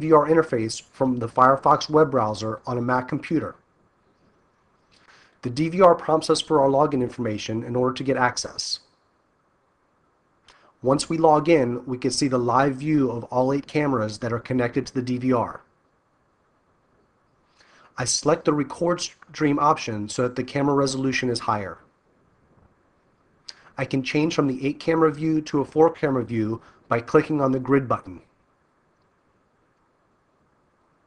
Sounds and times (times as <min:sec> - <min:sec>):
Speech: 0:00.0 - 0:03.6, 0:05.4 - 0:08.8, 0:10.8 - 0:15.7, 0:18.0 - 0:21.9, 0:23.8 - 0:28.3.